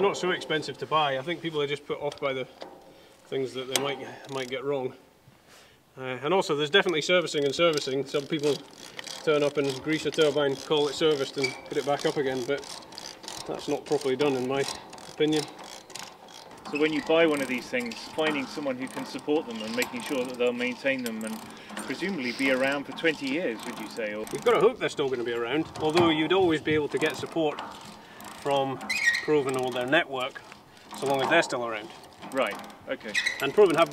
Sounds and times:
Speech: 0:00.0 - 0:02.5, 0:03.3 - 0:05.0, 0:06.0 - 0:08.6, 0:09.2 - 0:12.6, 0:13.5 - 0:15.5, 0:16.7 - 0:27.6, 0:28.4 - 0:30.4, 0:31.0 - 0:33.9.

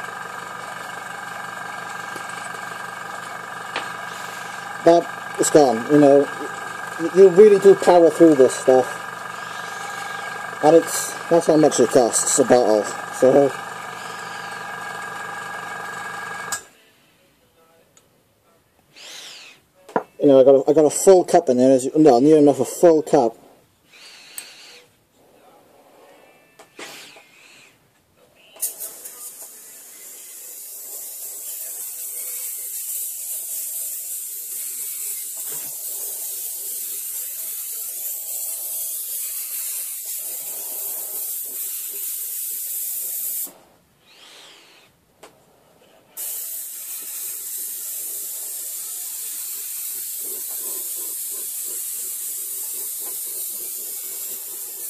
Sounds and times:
Electric toothbrush: 0:00.0 - 0:16.7, 0:19.0 - 0:19.6, 0:28.6 - 0:44.9, 0:46.2 - 0:54.9
Inside, small room: 0:00.0 - 0:54.9.

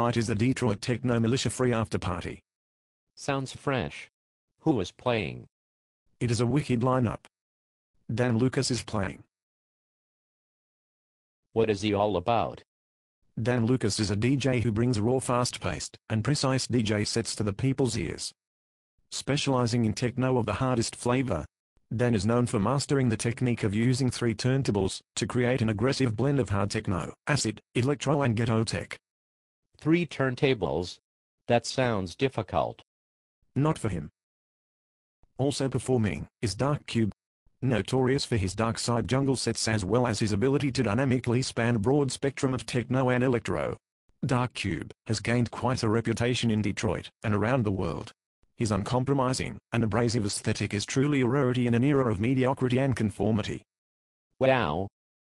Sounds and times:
Speech: 0:00.0 - 0:02.5, 0:03.2 - 0:05.5, 0:06.2 - 0:07.3, 0:08.1 - 0:09.3, 0:11.6 - 0:12.7, 0:13.4 - 0:18.4, 0:19.1 - 0:29.0, 0:29.8 - 0:32.9, 0:33.6 - 0:34.2, 0:35.4 - 0:53.7, 0:54.4 - 0:55.0.

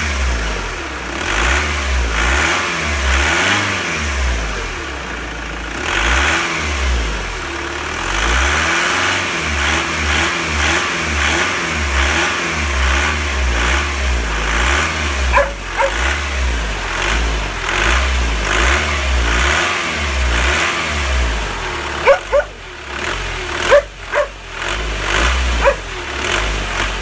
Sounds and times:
Accelerating, revving, vroom: 0:00.0 - 0:04.8, 0:05.7 - 0:27.0
Car: 0:00.0 - 0:27.0
Heavy engine (low frequency): 0:00.0 - 0:27.0.

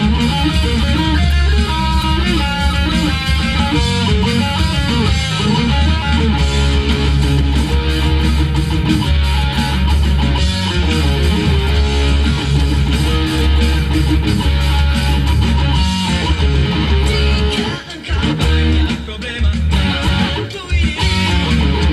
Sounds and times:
Music: 0:00.0 - 0:21.9.

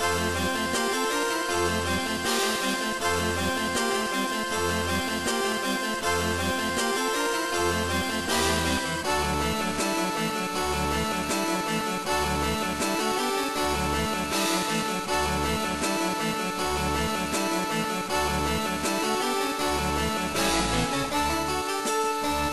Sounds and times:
Music: 0:00.0 - 0:22.5.

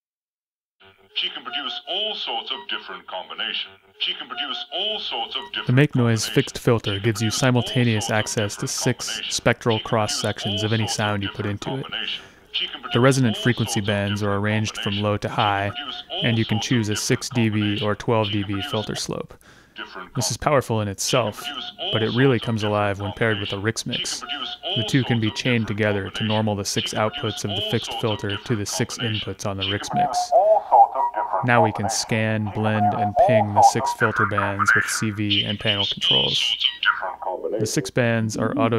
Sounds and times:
Speech: 0:01.2 - 0:30.4, 0:31.4 - 0:36.6, 0:37.6 - 0:38.7.

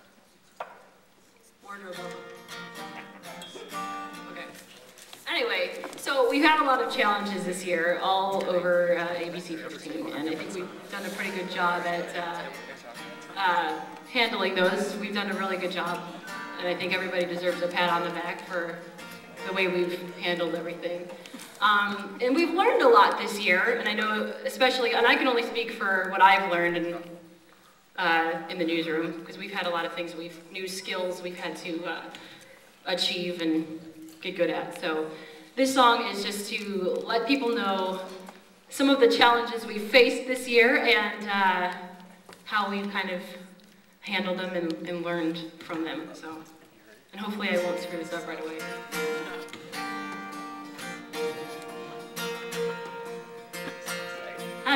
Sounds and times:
Music: 0:01.6 - 0:04.8, 0:10.8 - 0:21.1, 0:47.6 - 0:54.7
Speech: 0:05.3 - 0:18.8, 0:19.4 - 0:27.1, 0:32.9 - 0:38.1, 0:44.1 - 0:48.6.

